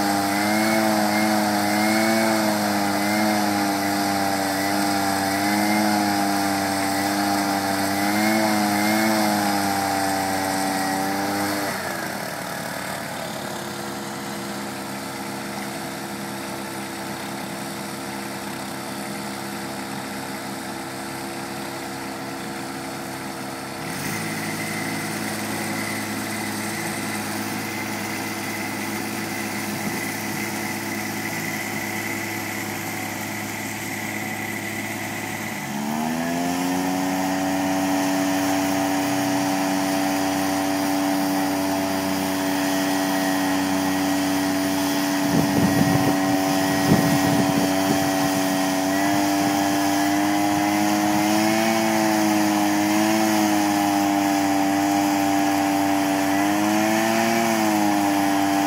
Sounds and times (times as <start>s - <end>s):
Lawn mower: 0.0s - 58.6s
Vehicle: 0.0s - 58.6s.